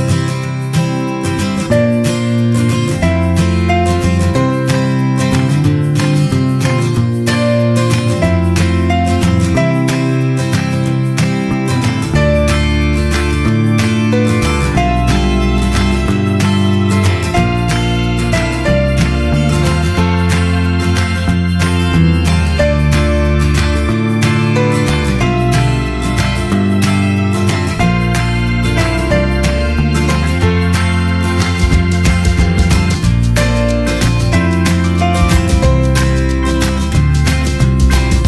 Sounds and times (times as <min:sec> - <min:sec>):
Music: 0:00.0 - 0:38.2.